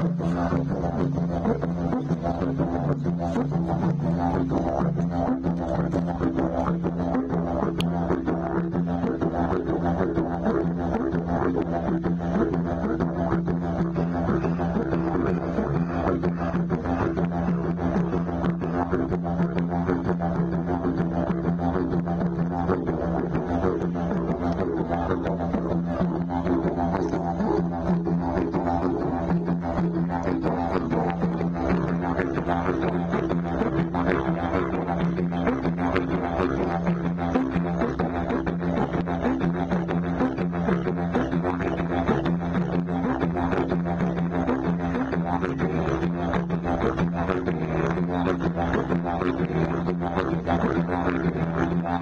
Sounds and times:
Didgeridoo: 0.0s - 52.0s.

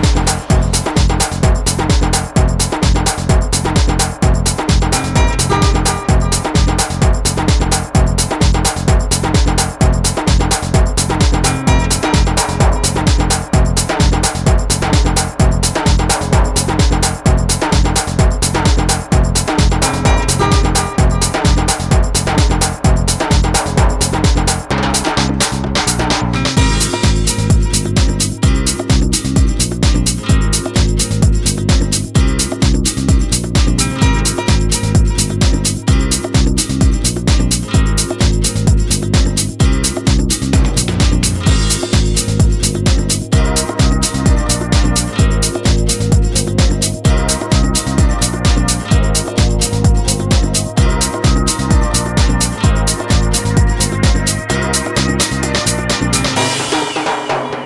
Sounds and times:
Exciting music: 0.0s - 57.6s
Pop music: 0.0s - 57.6s.

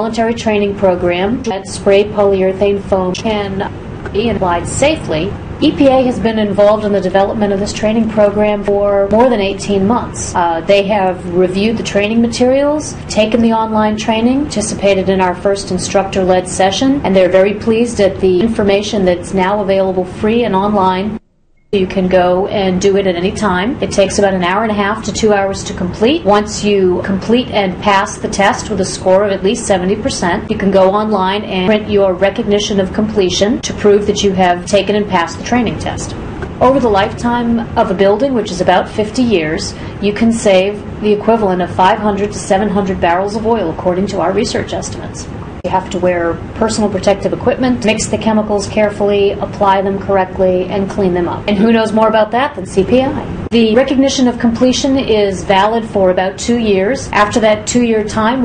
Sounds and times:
Speech: 0.0s - 21.2s, 21.8s - 58.4s.

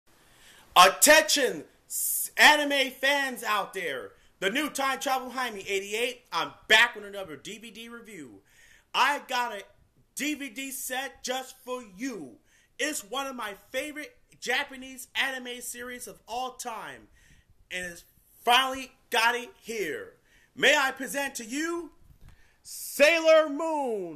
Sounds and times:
Speech: 0.8s - 17.1s, 17.7s - 22.0s, 22.7s - 24.1s.

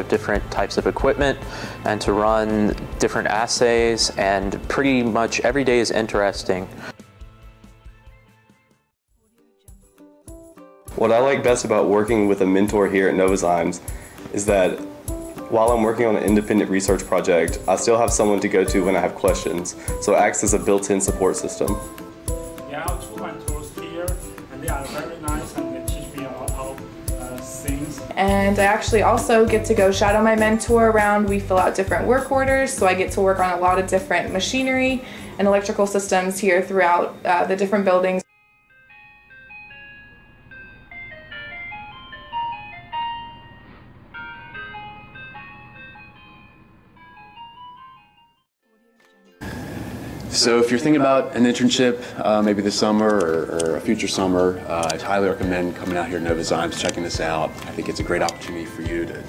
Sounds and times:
Music: 0.0s - 46.4s, 47.2s - 59.2s.

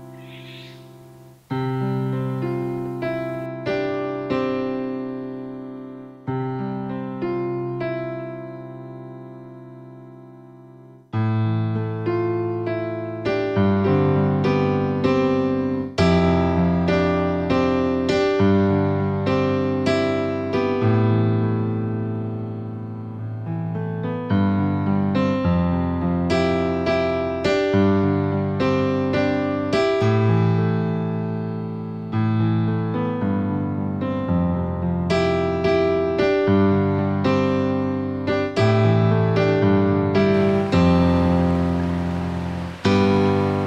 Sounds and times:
Music: 0.0s - 43.6s.

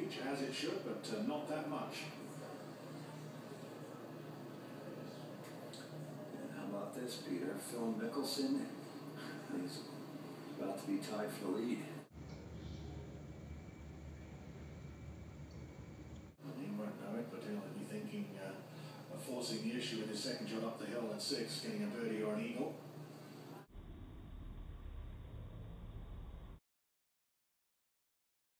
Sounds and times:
Speech: 0.0s - 13.2s, 16.4s - 22.8s.

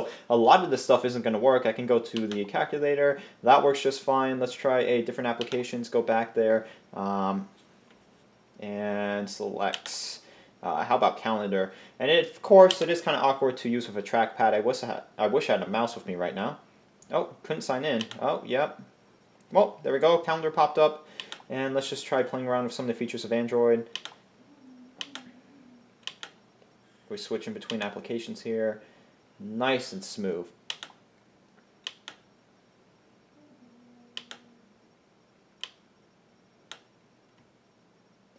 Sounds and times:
Speech: 0.0s - 7.5s, 8.6s - 18.8s, 19.5s - 23.9s, 27.1s - 28.8s, 29.4s - 30.5s.

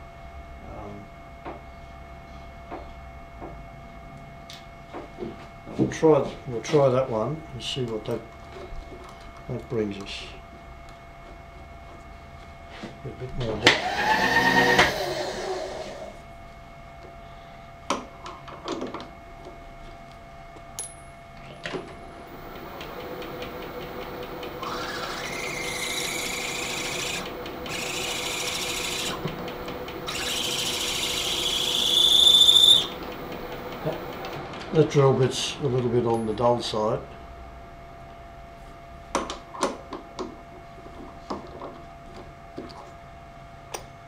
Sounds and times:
Drill: 13.6s - 16.2s, 22.3s - 34.4s.

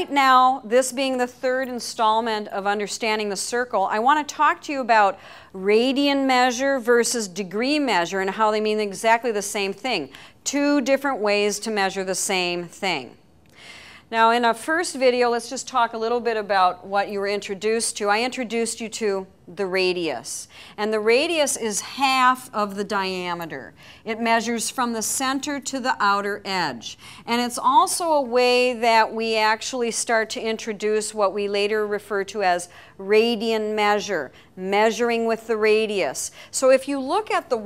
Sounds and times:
Speech: 14.1s - 37.6s.

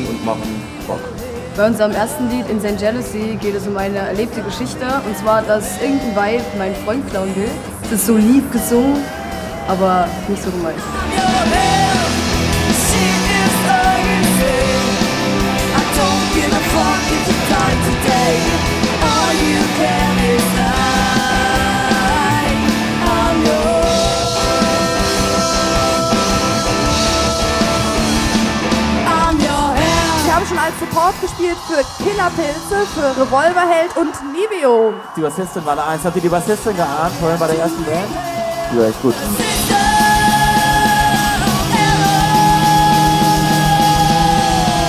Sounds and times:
Music: 0.0s - 44.8s.

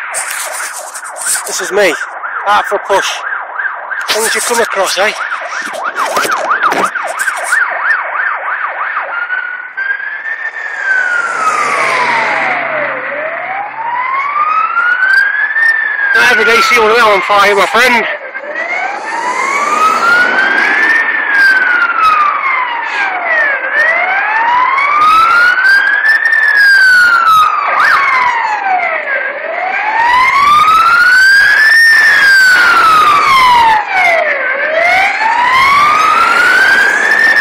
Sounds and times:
Fire engine, fire truck (siren): 0.0s - 37.4s.

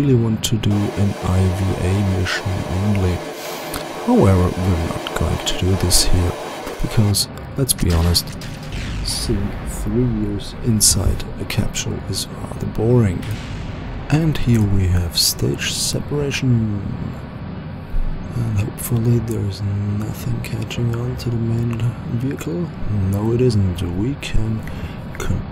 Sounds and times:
Speech: 0.0s - 3.3s, 4.1s - 13.5s, 14.1s - 17.2s, 18.0s - 25.5s.

